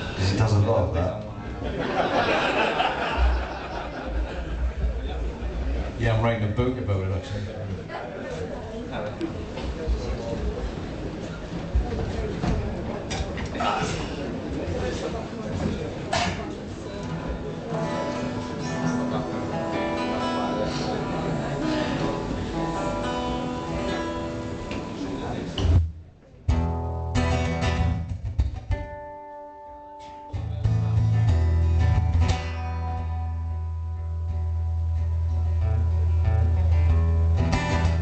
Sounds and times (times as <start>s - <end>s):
Speech: 0.2s - 1.5s, 4.9s - 19.6s, 24.7s - 26.5s
Music: 17.7s - 38.0s.